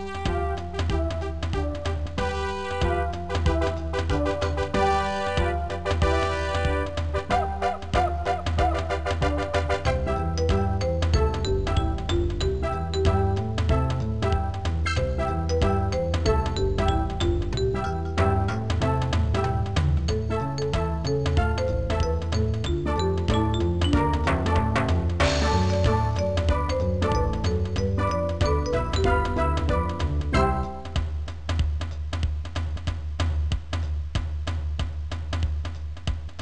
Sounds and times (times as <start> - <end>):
Soundtrack music: 0.0 - 31.2.